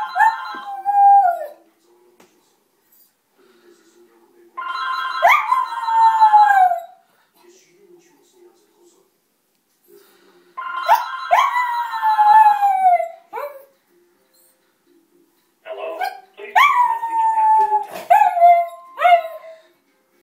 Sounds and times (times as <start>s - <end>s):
Speech: 7.4s - 9.2s, 14.9s - 16.6s.